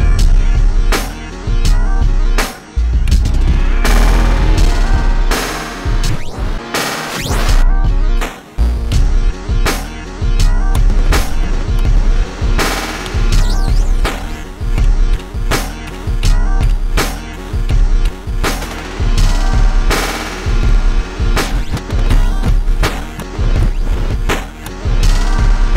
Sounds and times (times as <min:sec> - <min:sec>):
Sampler: 0:03.0 - 0:08.0, 0:08.6 - 0:25.7.